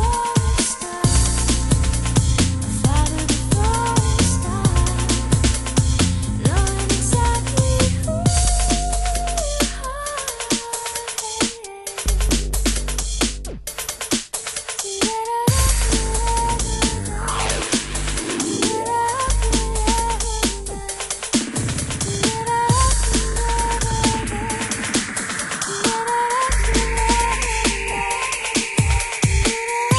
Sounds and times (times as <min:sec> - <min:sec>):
Drum and bass: 0:00.0 - 0:29.9.